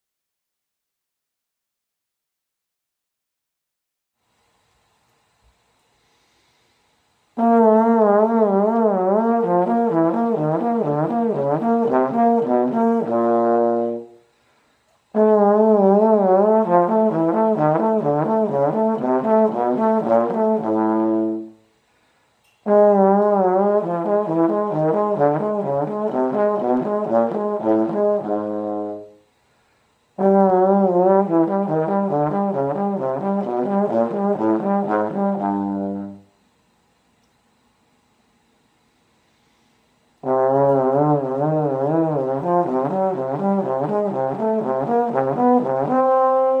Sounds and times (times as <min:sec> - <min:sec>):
Trombone: 0:07.4 - 0:14.2, 0:15.1 - 0:21.6, 0:22.6 - 0:29.2, 0:30.2 - 0:36.4, 0:40.2 - 0:46.6.